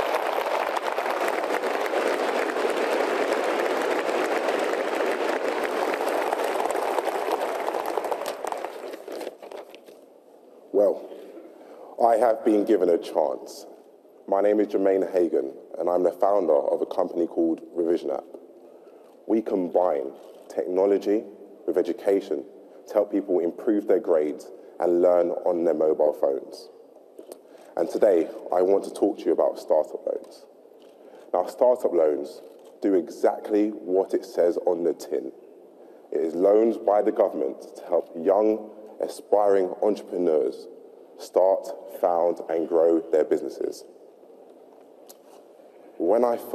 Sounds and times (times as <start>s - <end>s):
Narration, monologue: 8.1s - 46.5s
Male speech, man speaking: 10.8s - 11.1s, 12.0s - 13.7s, 14.3s - 18.3s, 19.3s - 26.7s, 27.8s - 30.5s, 31.3s - 35.4s, 36.1s - 43.9s, 46.0s - 46.5s.